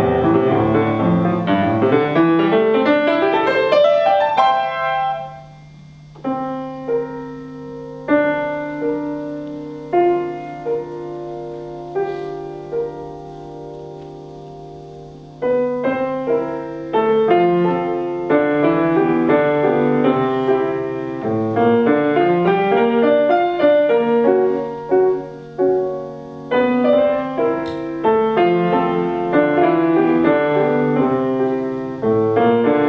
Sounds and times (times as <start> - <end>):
Music: 0.0 - 32.8.